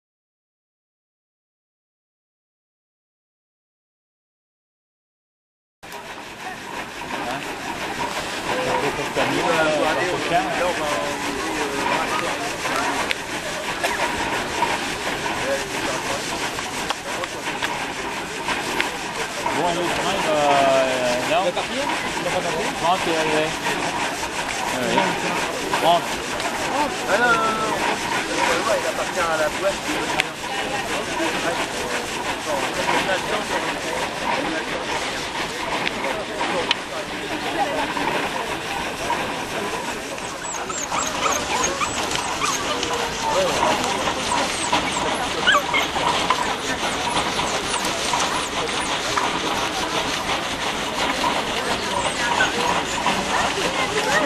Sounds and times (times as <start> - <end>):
Engine: 5.9 - 54.2
Speech: 6.0 - 54.2.